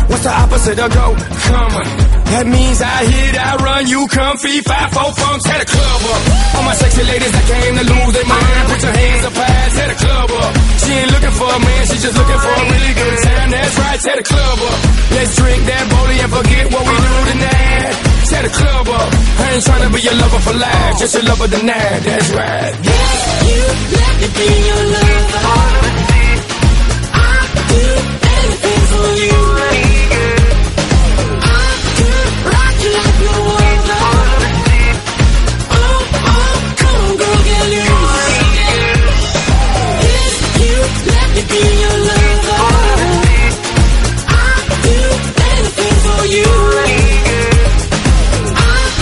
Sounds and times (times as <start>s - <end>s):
Pop music: 0.0s - 49.0s.